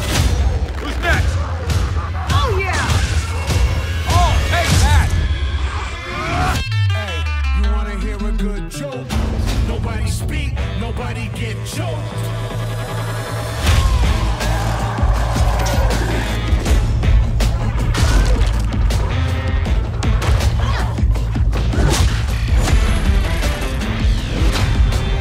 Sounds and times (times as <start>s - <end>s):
Music: 0.0s - 25.2s.